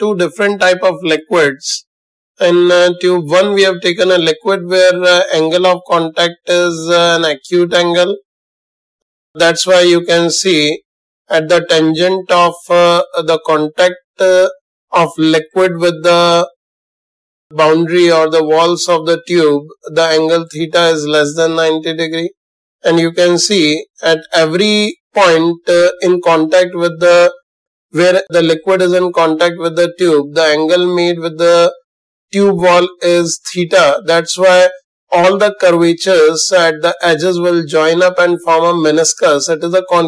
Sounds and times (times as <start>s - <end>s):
Speech: 0.0s - 1.8s, 2.4s - 8.2s, 9.4s - 16.6s, 17.6s - 27.4s, 28.0s - 31.8s, 32.4s - 40.0s.